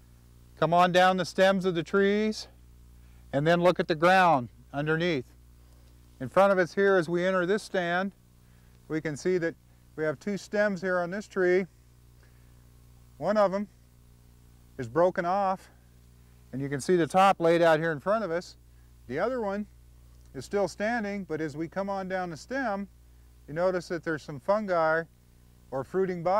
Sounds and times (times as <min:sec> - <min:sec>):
Speech: 0:00.6 - 0:02.5, 0:03.3 - 0:05.3, 0:06.2 - 0:08.2, 0:08.9 - 0:11.7, 0:13.2 - 0:13.7, 0:14.8 - 0:15.8, 0:16.5 - 0:19.7, 0:20.3 - 0:22.9, 0:23.5 - 0:25.1, 0:25.7 - 0:26.3.